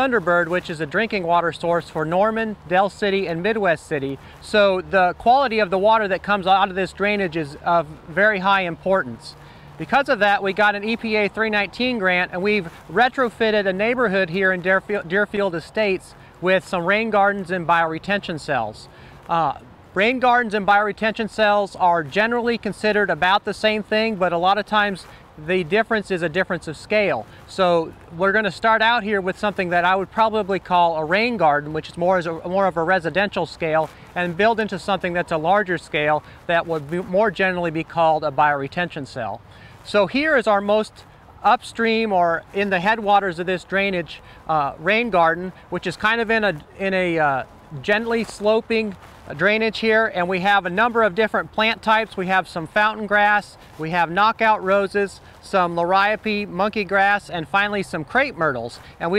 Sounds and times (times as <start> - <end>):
Speech: 0.0 - 59.1.